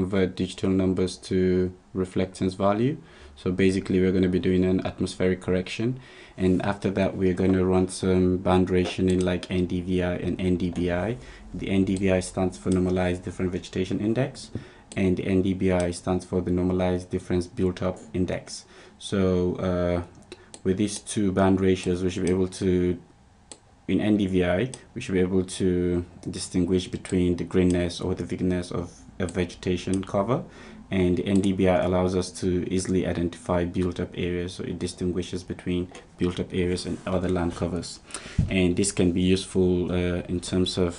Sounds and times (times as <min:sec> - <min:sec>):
Speech: 0:00.0 - 0:23.1, 0:23.9 - 0:40.9.